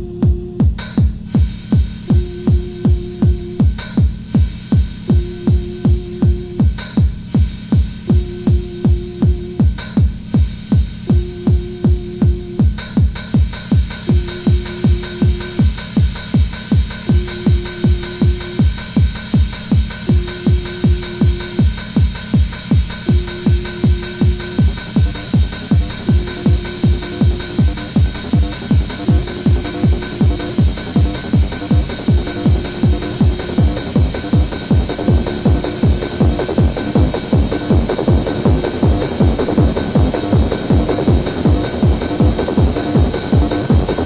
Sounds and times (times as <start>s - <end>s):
Electronic music: 0.0s - 44.0s.